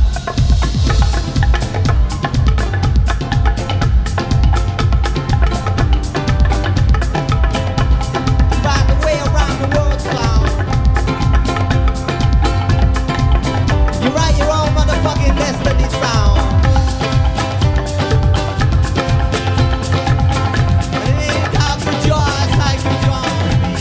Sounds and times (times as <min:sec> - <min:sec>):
Music: 0:00.0 - 0:23.8.